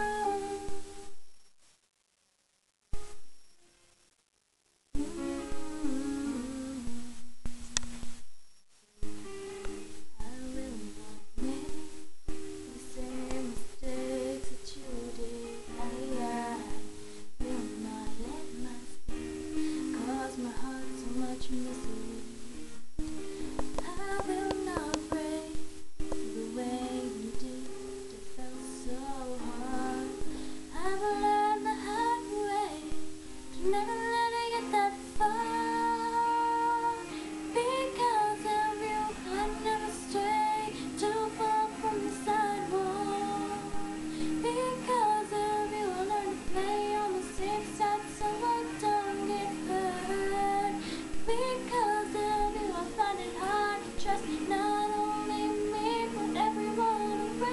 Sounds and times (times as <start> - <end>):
Female singing: 0.0 - 1.1, 5.0 - 7.2, 10.2 - 12.0, 12.7 - 19.2, 19.9 - 22.6, 23.7 - 25.6, 26.3 - 33.0, 33.6 - 57.5
Music: 0.0 - 1.4, 2.9 - 4.1, 4.9 - 57.5.